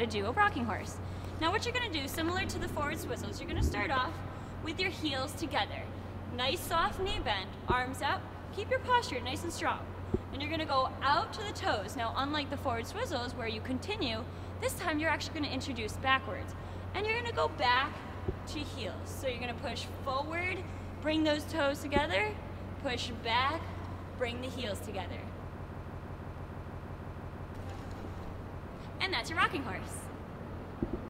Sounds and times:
Speech: 0:00.0 - 0:09.8, 0:10.4 - 0:25.3, 0:29.0 - 0:30.1.

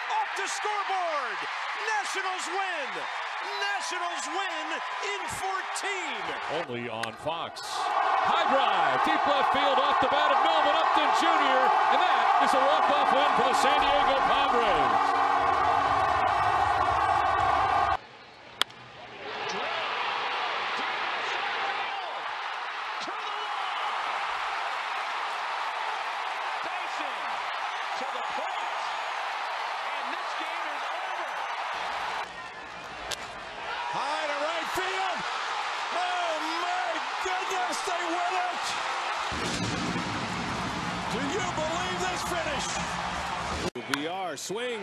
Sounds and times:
Speech: 0:00.0 - 0:15.0, 0:33.9 - 0:35.2, 0:36.0 - 0:38.8, 0:41.1 - 0:42.8, 0:43.8 - 0:44.8.

